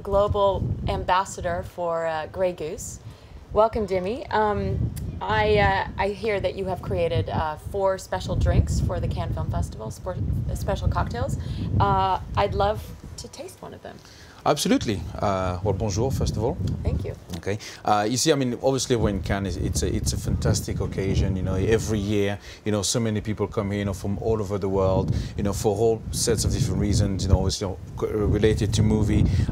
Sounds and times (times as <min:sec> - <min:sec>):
Speech: 0:03.6 - 0:29.3.